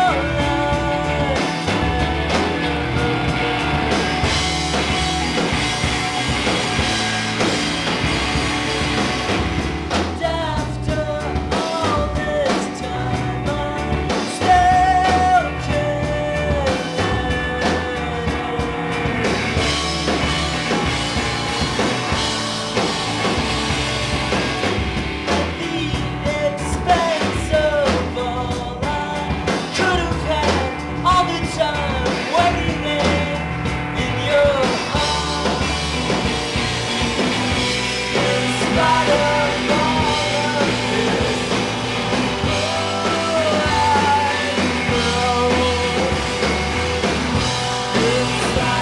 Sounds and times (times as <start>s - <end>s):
Music: 0.0s - 48.8s.